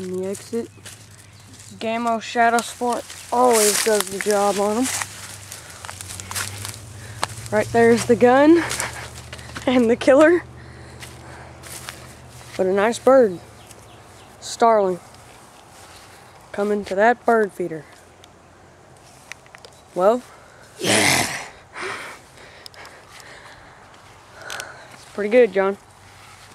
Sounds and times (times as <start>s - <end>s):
Speech: 0.0s - 0.7s, 1.7s - 5.0s, 7.5s - 8.6s, 9.6s - 10.4s, 12.6s - 13.4s, 14.4s - 15.0s, 16.6s - 17.9s, 20.0s - 21.1s, 25.1s - 25.8s.